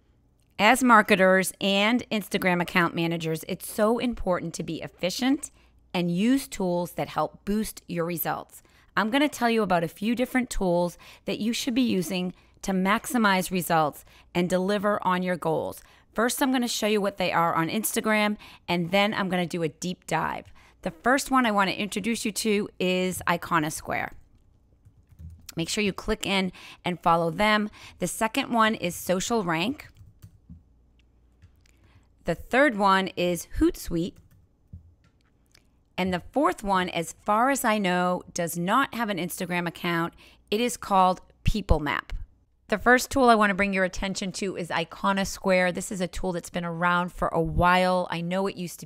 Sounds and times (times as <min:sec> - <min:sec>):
Speech: 0:00.6 - 0:24.2, 0:25.5 - 0:29.9, 0:32.3 - 0:34.2, 0:36.0 - 0:48.8.